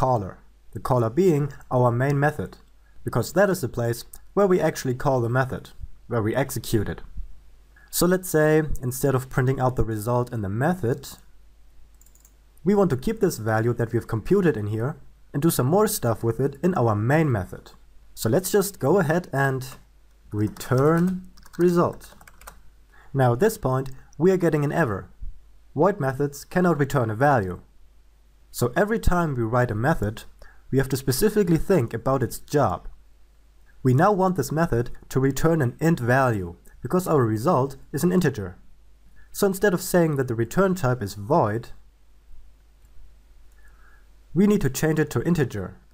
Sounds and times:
Speech: 0.0s - 7.2s, 7.9s - 11.3s, 12.6s - 22.2s, 23.1s - 25.2s, 25.8s - 27.7s, 28.5s - 33.0s, 33.8s - 38.6s, 39.3s - 41.8s, 44.3s - 45.8s.

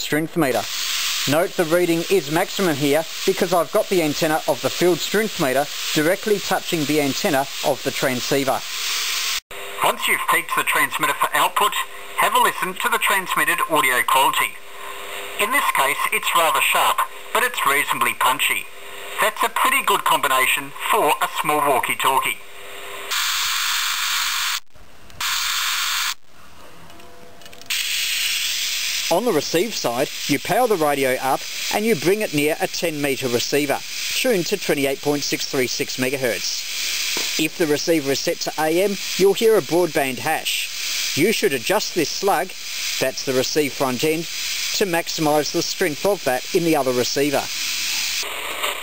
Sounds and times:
Speech: 0.0s - 0.7s, 1.3s - 8.6s, 9.8s - 14.6s, 15.4s - 22.4s, 29.1s - 36.6s, 37.4s - 47.5s
Radio: 0.4s - 8.7s, 9.8s - 22.4s, 29.0s - 48.8s.

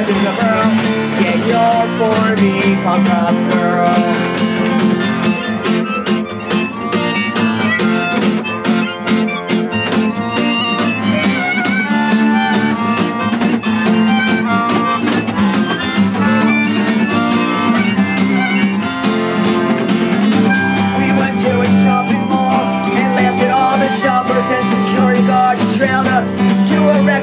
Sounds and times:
Harmonica: 0.0s - 27.2s
Wind instrument, woodwind instrument: 0.0s - 27.2s.

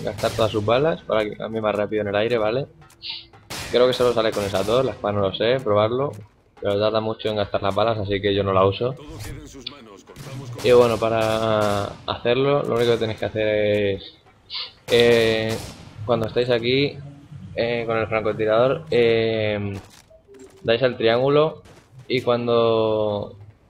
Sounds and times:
Speech: 3.8s - 14.1s, 17.6s - 19.8s, 20.6s - 23.4s.

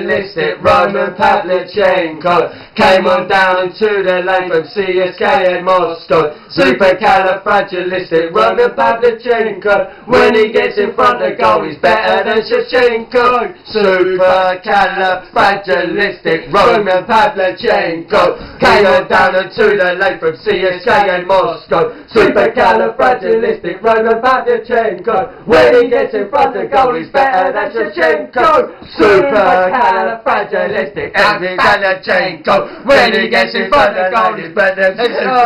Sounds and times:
Speech: 27.9s - 30.1s, 33.3s - 35.4s.

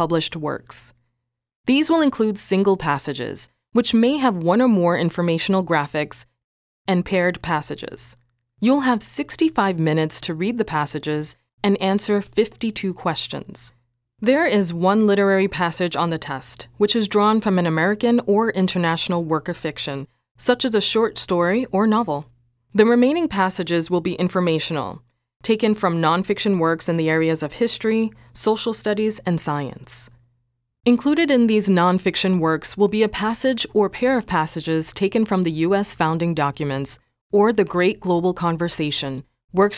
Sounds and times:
Speech: 0.0s - 1.0s, 1.7s - 6.3s, 6.9s - 30.2s, 30.9s - 39.7s.

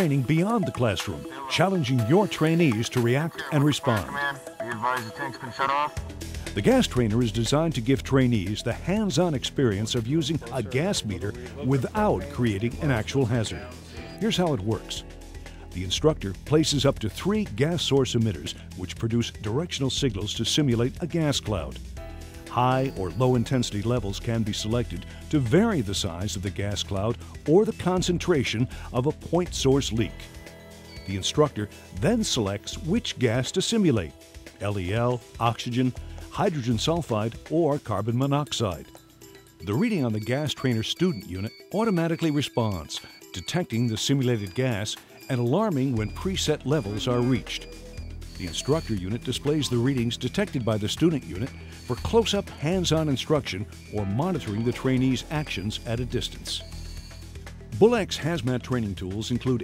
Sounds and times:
Speech: 0.0s - 5.9s, 6.6s - 15.0s, 15.7s - 21.8s, 22.5s - 30.3s, 31.1s - 38.9s, 39.6s - 47.8s, 48.4s - 56.6s, 57.8s - 59.6s
Music: 0.0s - 59.6s.

